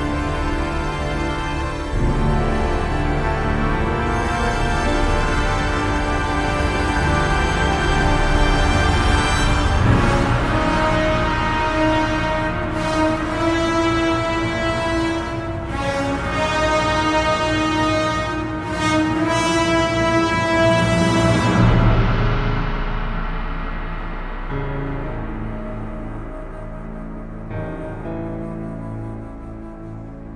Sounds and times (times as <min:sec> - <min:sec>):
Music: 0:00.0 - 0:30.3.